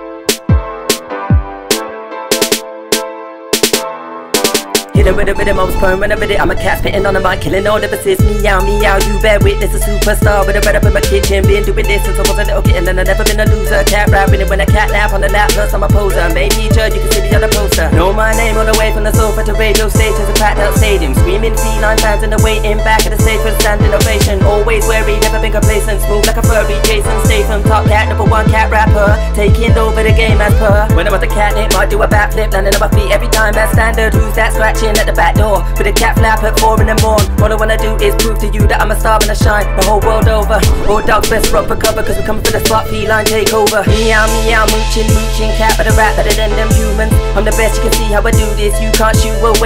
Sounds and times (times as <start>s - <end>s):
Music: 0.0s - 49.6s.